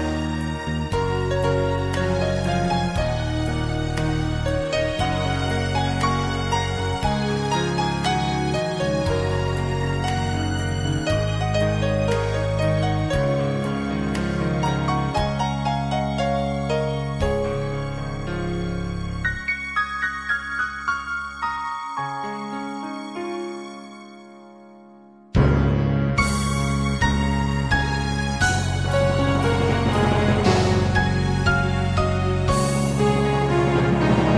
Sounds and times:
Music: 0:00.0 - 0:34.3.

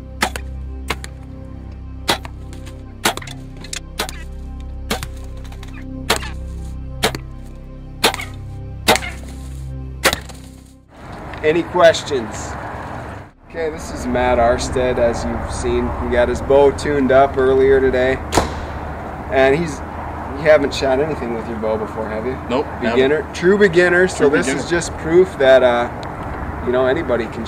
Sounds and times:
Speech: 0:11.4 - 0:12.6, 0:13.5 - 0:18.2, 0:20.4 - 0:25.9, 0:26.6 - 0:27.4.

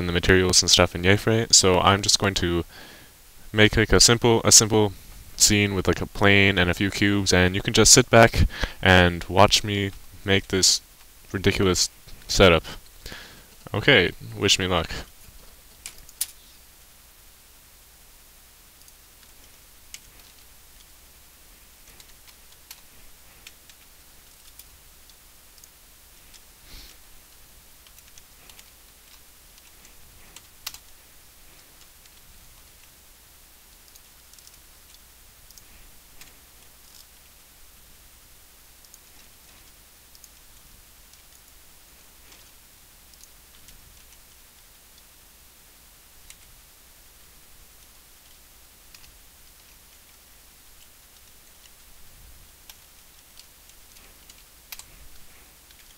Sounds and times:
Speech: 0:00.0 - 0:02.7, 0:03.5 - 0:12.8, 0:13.6 - 0:15.1.

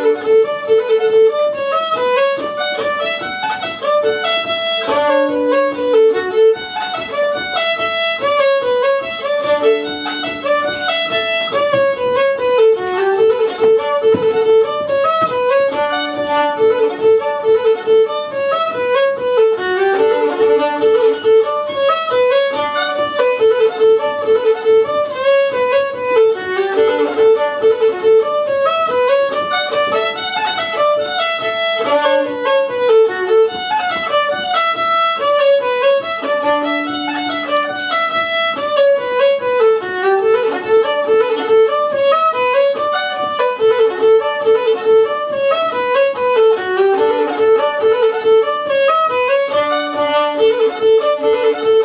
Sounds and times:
Violin, fiddle: 0:00.0 - 0:51.8.

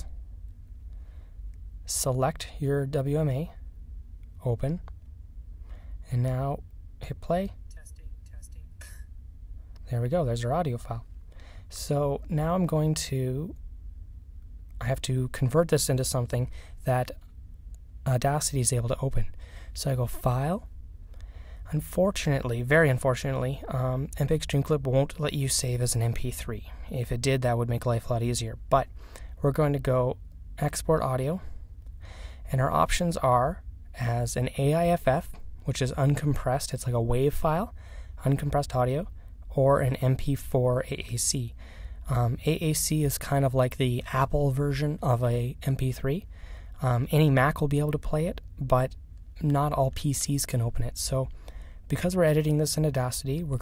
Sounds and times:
Narration, monologue: 0:00.0 - 0:53.6.

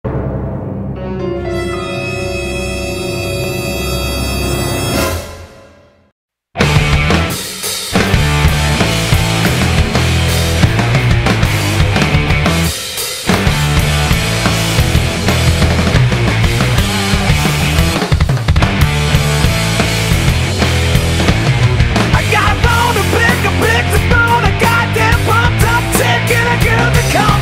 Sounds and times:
Scary music: 0:00.1 - 0:06.1.

